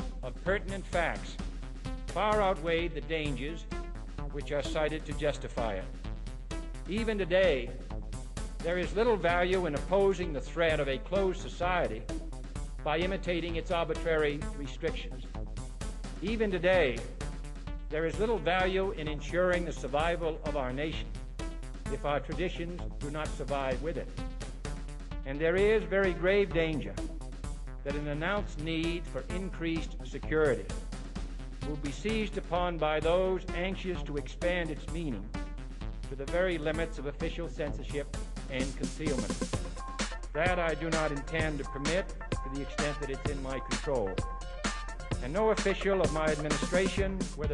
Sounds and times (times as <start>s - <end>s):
Music: 0.0s - 47.5s
Narration, monologue: 0.0s - 47.5s
Male speech, man speaking: 0.2s - 1.4s, 2.1s - 3.7s, 4.4s - 5.9s, 6.9s - 7.8s, 8.6s - 12.1s, 12.9s - 15.3s, 16.2s - 17.2s, 17.9s - 21.1s, 21.9s - 24.1s, 25.3s - 27.0s, 27.8s - 30.7s, 31.6s - 35.3s, 36.1s - 39.4s, 40.4s - 44.2s, 45.2s - 47.5s.